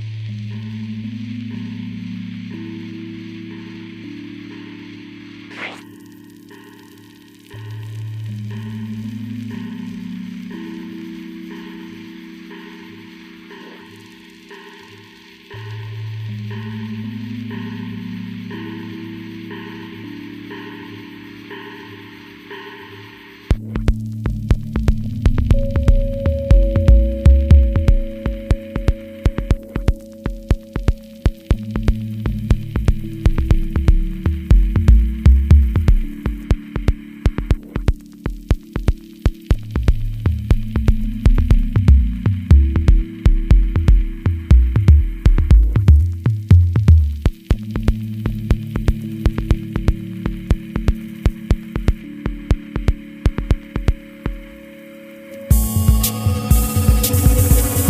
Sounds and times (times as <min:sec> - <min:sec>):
Harmonic: 0:00.0 - 0:57.9
Music: 0:00.0 - 0:57.9.